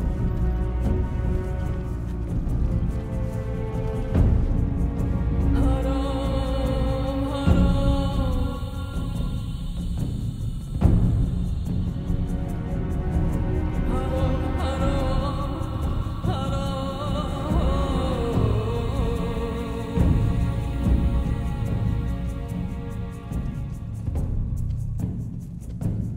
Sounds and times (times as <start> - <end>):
Music: 0.0 - 26.1.